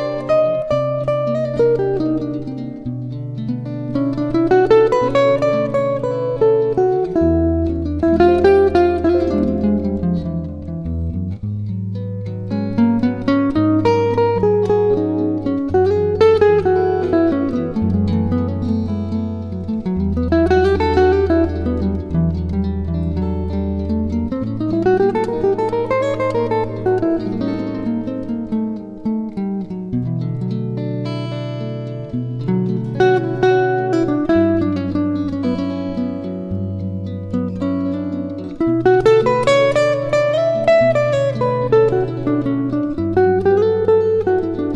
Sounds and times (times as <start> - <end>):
Acoustic guitar: 0.0 - 44.7
Strum: 0.0 - 44.7.